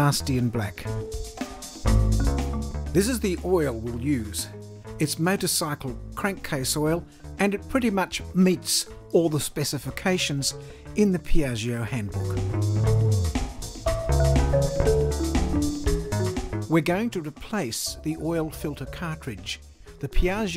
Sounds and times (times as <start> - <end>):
Speech: 0.0 - 1.0, 3.0 - 12.3, 16.7 - 20.5
Music: 0.0 - 20.5.